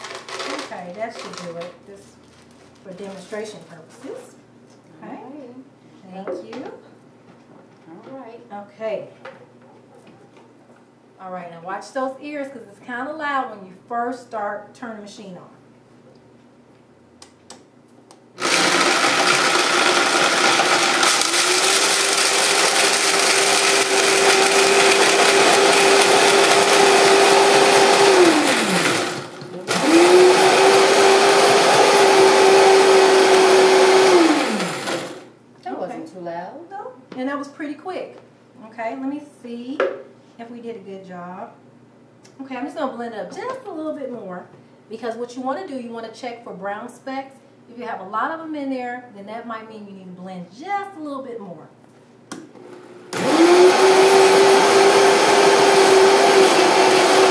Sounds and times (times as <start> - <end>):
Blender: 0.0 - 1.4, 18.4 - 35.3, 52.6 - 57.3.